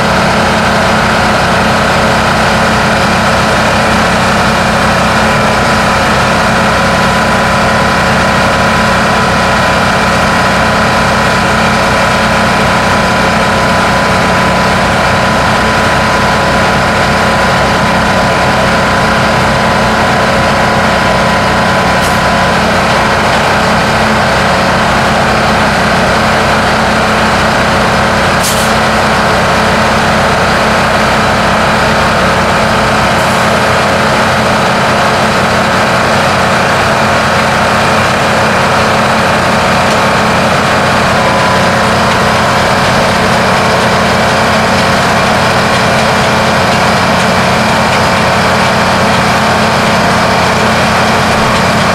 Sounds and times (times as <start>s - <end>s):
Truck: 0.0s - 51.9s.